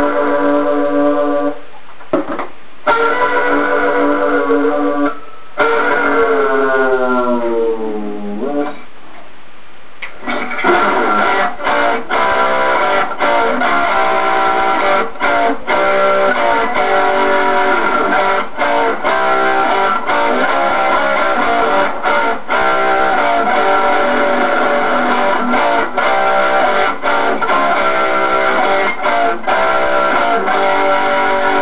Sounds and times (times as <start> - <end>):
Strum: 10.0 - 31.6.